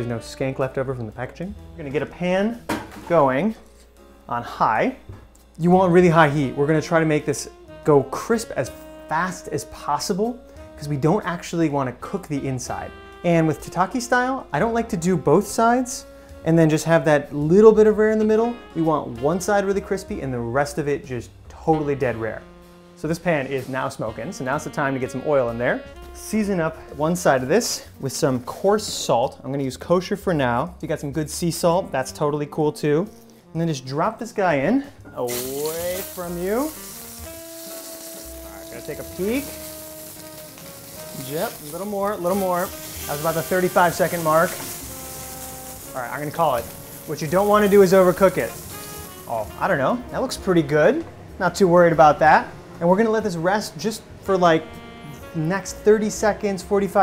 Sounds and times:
Sizzle: 35.1s - 50.1s.

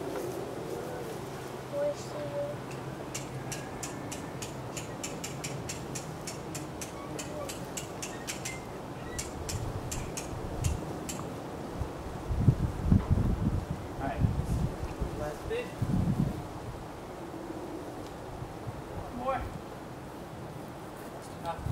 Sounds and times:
Wind noise (microphone): 9.1s - 10.8s, 11.8s - 16.9s, 21.5s - 21.7s.

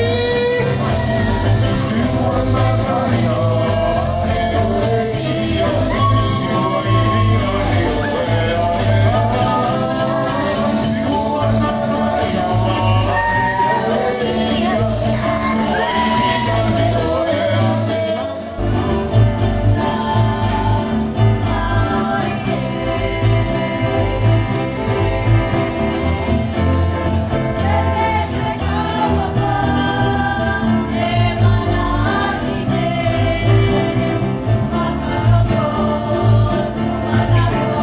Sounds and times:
Maraca: 0.0s - 37.8s.

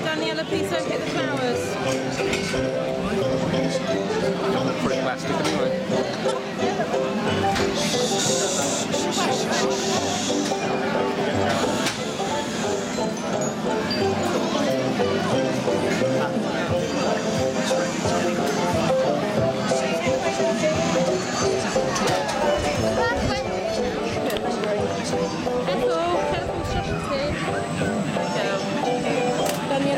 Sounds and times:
Music: 0.0s - 29.9s.

